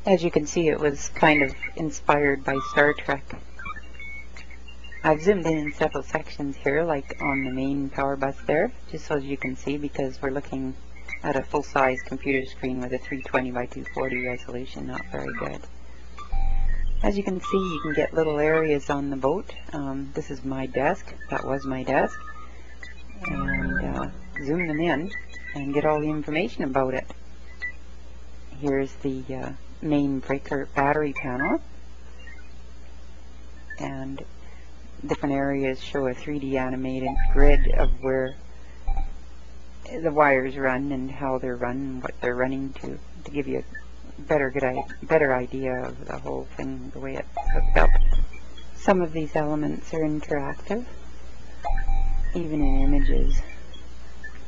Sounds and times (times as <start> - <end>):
Speech: 0.0 - 3.4, 5.0 - 15.7, 17.0 - 22.2, 23.2 - 27.1, 28.5 - 31.7, 33.7 - 34.3, 35.0 - 38.4, 39.9 - 48.2, 48.8 - 51.0, 52.3 - 53.5.